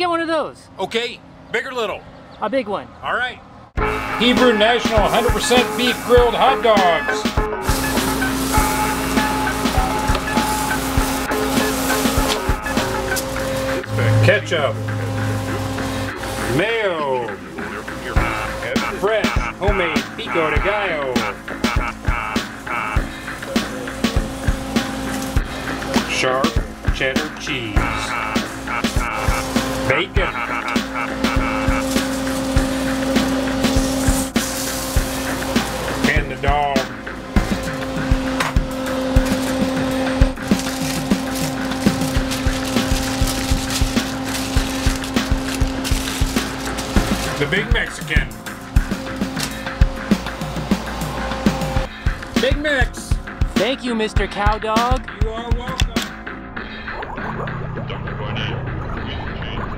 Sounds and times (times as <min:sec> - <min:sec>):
Music: 0:03.8 - 0:59.7
Speech: 0:04.2 - 0:07.3, 0:13.8 - 0:14.8, 0:16.4 - 0:21.3, 0:26.0 - 0:28.1, 0:29.9 - 0:30.4, 0:36.0 - 0:36.9, 0:47.4 - 0:48.4, 0:52.4 - 0:56.1, 0:57.9 - 0:59.7.